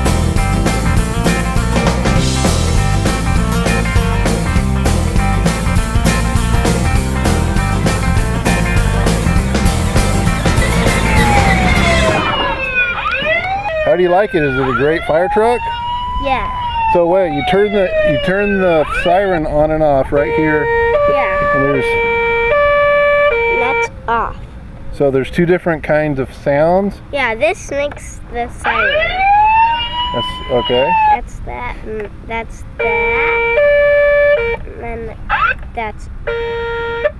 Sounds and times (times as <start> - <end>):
Outside, rural or natural: 0.0 - 37.1
Ambulance (siren): 10.6 - 24.0, 28.7 - 31.2, 32.8 - 34.6.